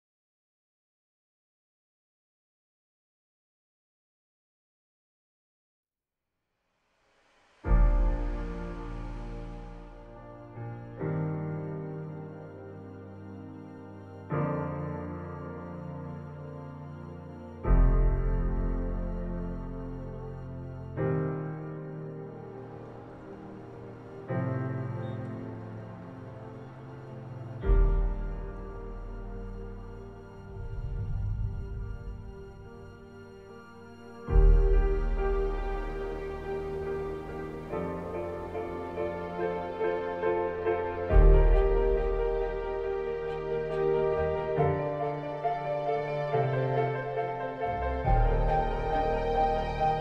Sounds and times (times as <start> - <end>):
Music: 6.6 - 50.0.